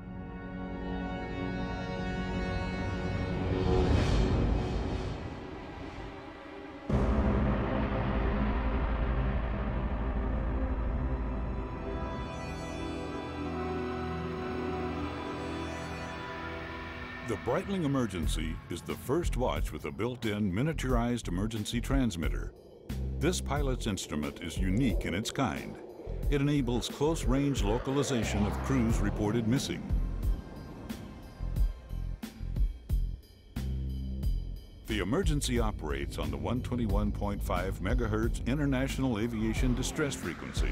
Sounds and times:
Music: 0:00.0 - 0:40.7
Speech: 0:17.2 - 0:22.5, 0:23.2 - 0:30.0, 0:34.9 - 0:40.7.

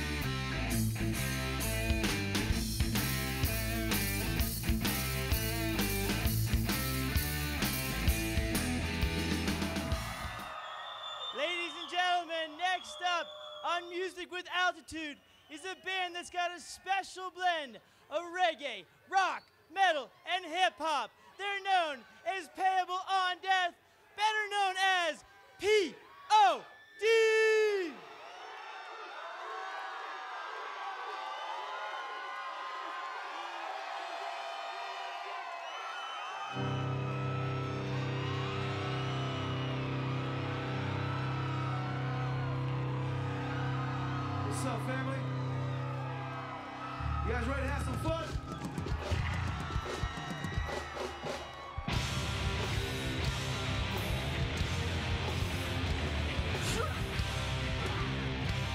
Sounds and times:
Speech: 0:11.4 - 0:28.0, 0:47.3 - 0:48.4.

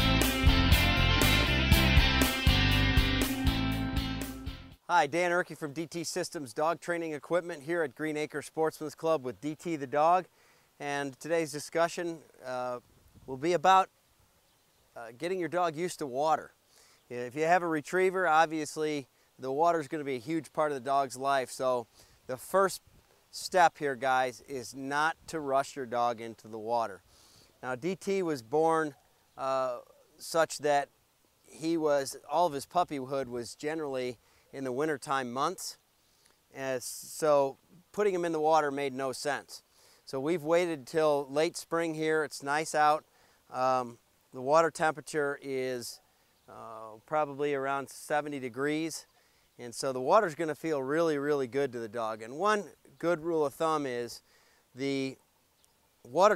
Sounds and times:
Speech: 0:04.9 - 0:13.9, 0:15.0 - 0:16.5, 0:17.1 - 0:22.8, 0:23.4 - 0:27.0, 0:27.6 - 0:30.9, 0:31.5 - 0:35.8, 0:36.6 - 0:54.2, 0:54.8 - 0:55.2, 0:56.1 - 0:56.3.

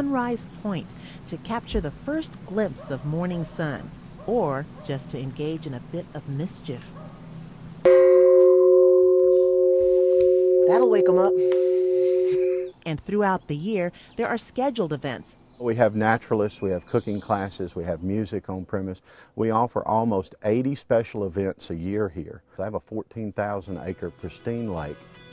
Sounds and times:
Tubular bells: 0:07.9 - 0:12.7.

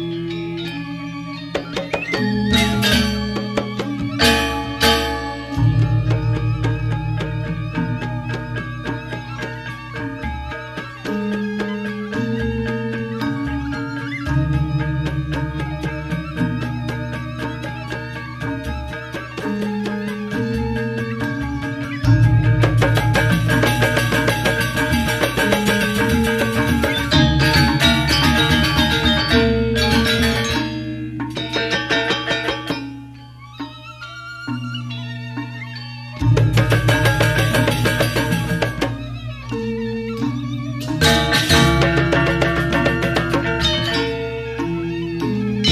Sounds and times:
Music: 0:00.0 - 0:45.7.

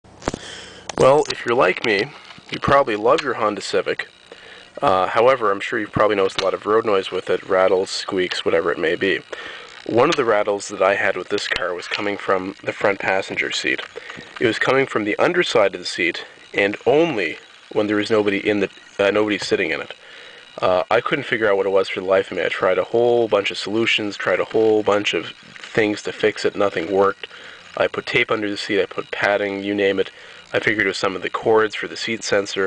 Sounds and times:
Speech: 0:01.0 - 0:04.1, 0:04.8 - 0:20.0, 0:20.6 - 0:32.6.

